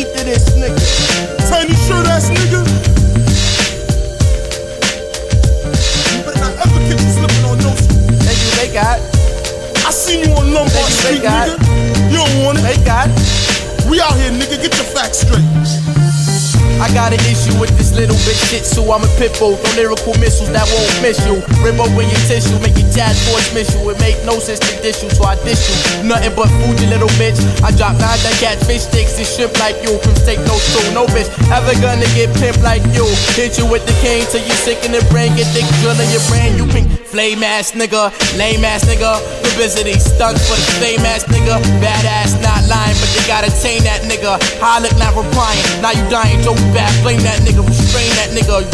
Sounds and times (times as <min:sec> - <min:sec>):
Pop music: 0:00.0 - 0:48.7.